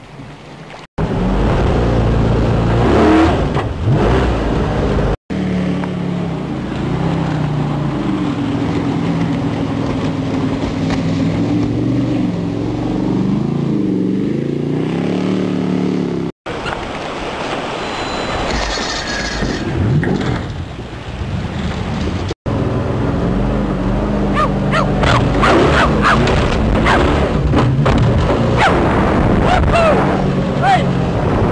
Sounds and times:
Motorboat, speedboat: 0:00.0 - 0:31.5.

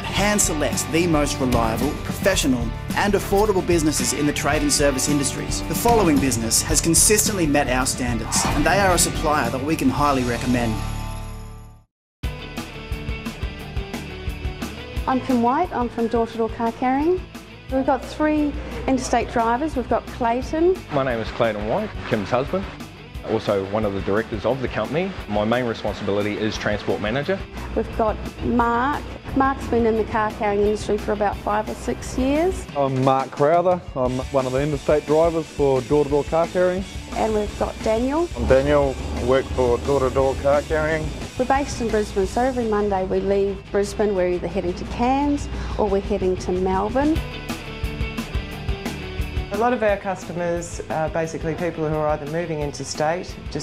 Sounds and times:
Music: 0:00.0 - 0:53.6
Speech: 0:28.0 - 0:43.2, 0:49.5 - 0:53.6.

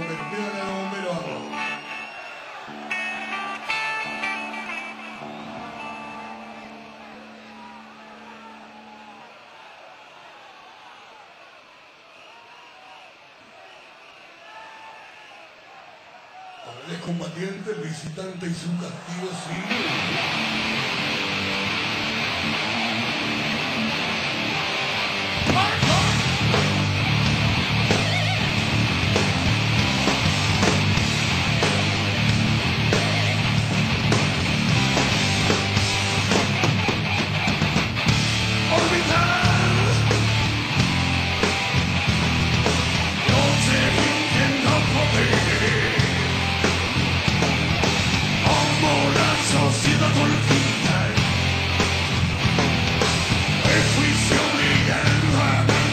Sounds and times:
Speech: 0:00.0 - 0:01.6, 0:16.6 - 0:19.8, 0:25.5 - 0:26.3
Music: 0:00.0 - 0:09.4, 0:19.6 - 0:55.9.

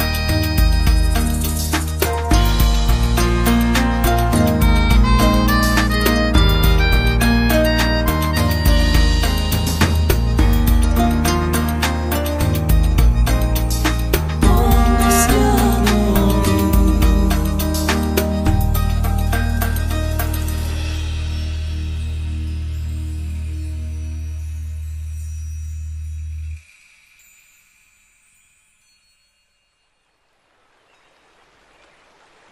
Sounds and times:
Music: 0:00.0 - 0:30.1.

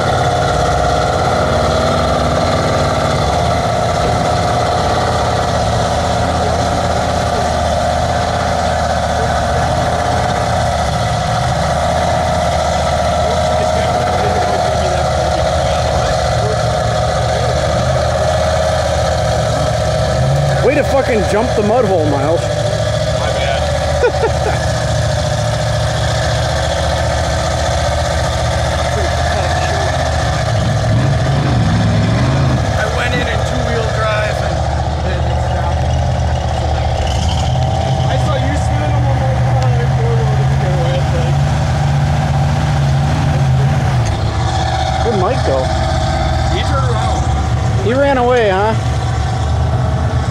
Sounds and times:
Speech: 0:13.3 - 0:17.9, 0:20.6 - 0:22.4, 0:23.2 - 0:23.7, 0:28.9 - 0:29.9, 0:32.8 - 0:35.8, 0:38.1 - 0:41.4, 0:45.0 - 0:45.7.

